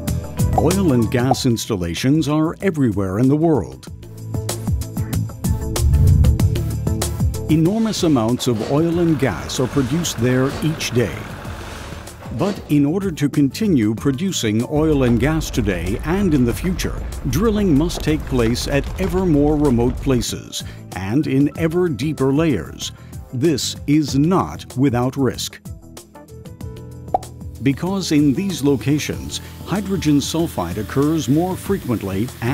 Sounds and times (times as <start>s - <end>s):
Music: 0.0s - 32.5s
Speech: 0.6s - 3.9s, 7.5s - 11.3s, 12.3s - 25.6s, 27.6s - 32.5s.